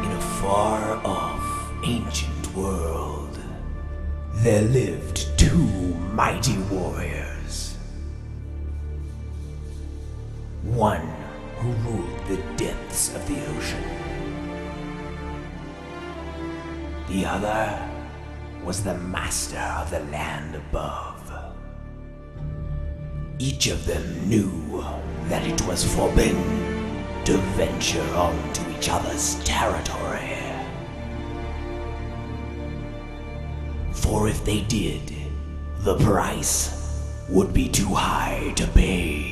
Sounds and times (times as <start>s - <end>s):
Speech: 0.0s - 3.7s, 4.3s - 8.0s, 10.6s - 14.1s, 17.1s - 18.0s, 18.6s - 21.6s, 23.4s - 30.9s, 33.9s - 39.3s
Music: 0.0s - 39.3s.